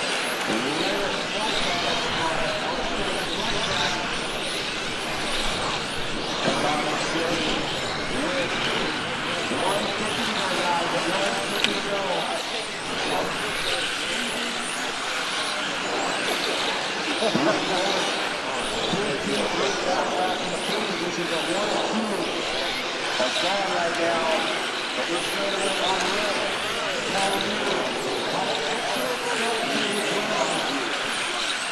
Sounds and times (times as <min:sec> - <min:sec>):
Race car, auto racing: 0:00.0 - 0:31.7.